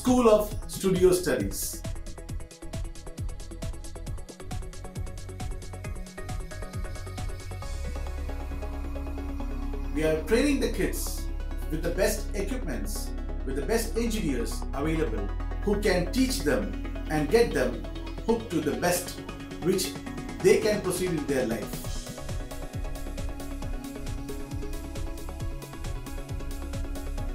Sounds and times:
Speech: 0.0 - 1.8, 10.0 - 21.9
Music: 0.0 - 27.3.

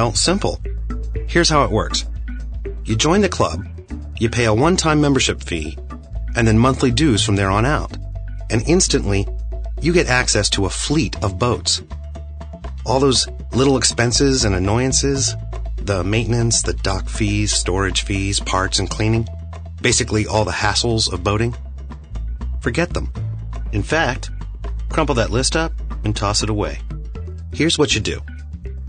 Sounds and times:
Speech: 0.0 - 0.6, 1.3 - 2.1, 2.9 - 5.8, 6.4 - 11.9, 12.9 - 21.6, 22.6 - 23.2, 23.8 - 24.3, 24.9 - 26.8, 27.6 - 28.3
Music: 0.0 - 28.8.

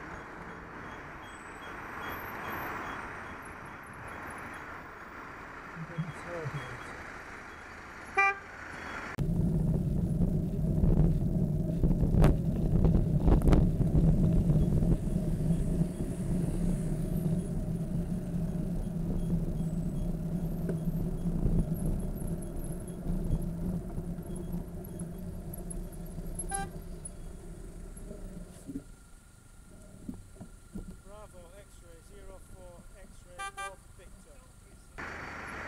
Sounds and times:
Car: 0.0 - 35.6
Outside, urban or manmade: 0.0 - 35.6.

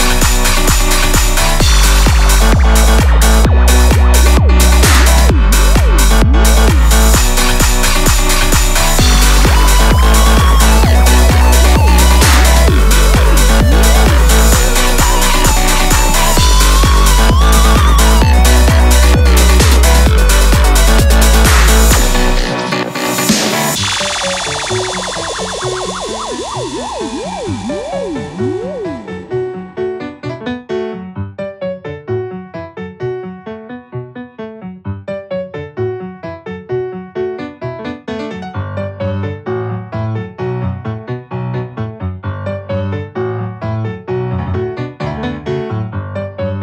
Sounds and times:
Music: 0.0 - 46.6.

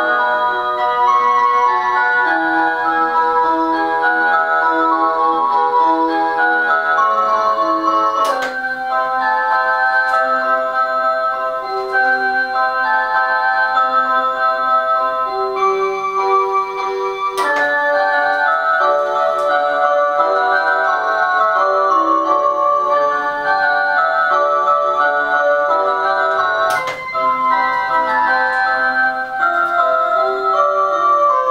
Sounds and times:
Clock: 0.0 - 31.5
Music: 0.0 - 31.5.

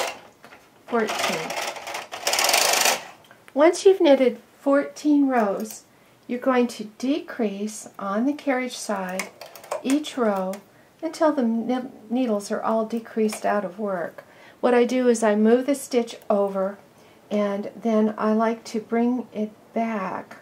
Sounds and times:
Inside, small room: 0.0 - 20.4
Speech: 0.9 - 1.6, 3.6 - 20.4
Sewing machine: 1.0 - 3.2.

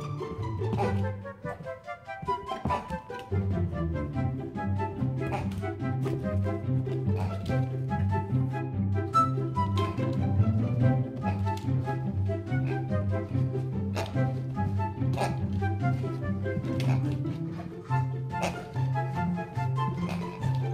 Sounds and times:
Music: 0.0 - 20.7
Oink: 0.8 - 1.0, 2.7 - 3.0, 5.2 - 5.6, 7.1 - 7.7, 12.6 - 12.9, 13.9 - 14.4, 15.1 - 15.5, 16.6 - 17.2, 18.3 - 18.8, 20.0 - 20.7.

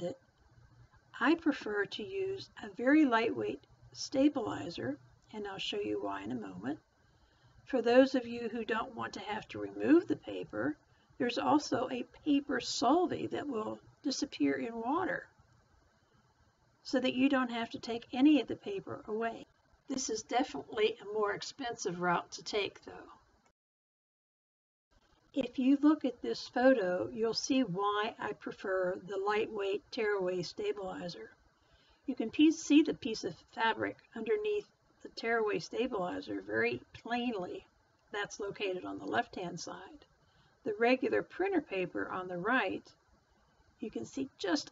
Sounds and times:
Speech: 1.2 - 6.8, 7.7 - 15.3, 16.9 - 23.2, 25.4 - 31.3, 32.1 - 40.0, 40.7 - 42.9, 43.8 - 44.7.

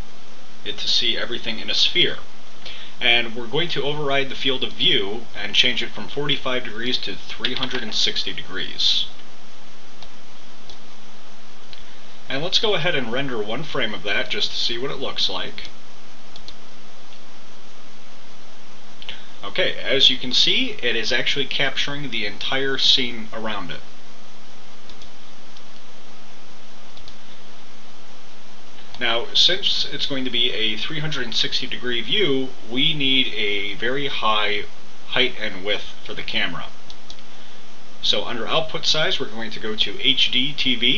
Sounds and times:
Speech: 0.6 - 2.3, 3.0 - 9.2, 12.3 - 15.8, 19.4 - 23.9, 29.0 - 36.8, 38.0 - 40.9.

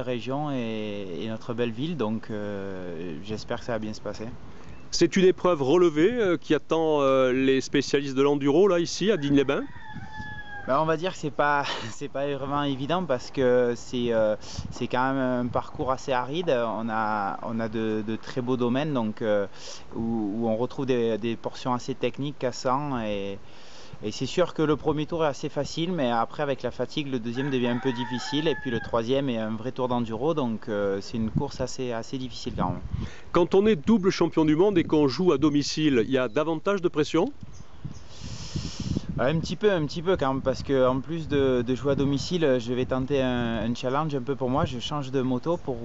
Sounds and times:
Speech: 0.0 - 9.8, 10.7 - 23.4, 24.0 - 37.4, 39.1 - 45.8.

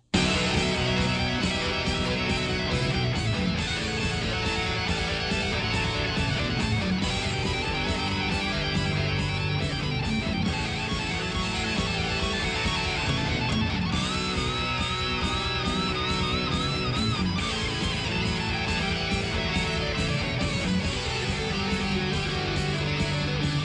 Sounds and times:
Electric guitar: 0.0 - 23.6.

